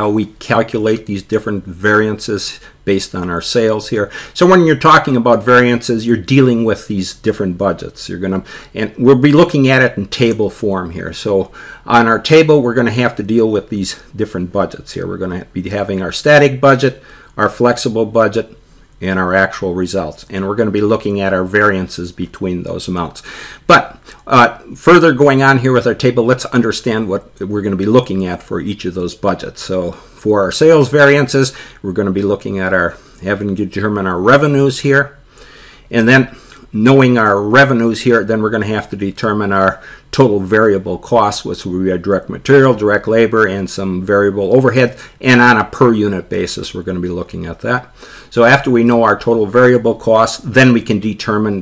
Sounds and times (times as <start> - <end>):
Speech: 0.0 - 35.2, 35.9 - 51.6.